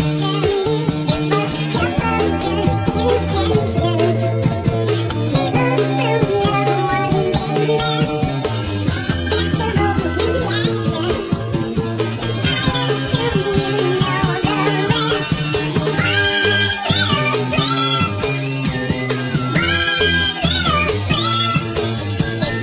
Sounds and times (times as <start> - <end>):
Music: 0.0 - 22.6.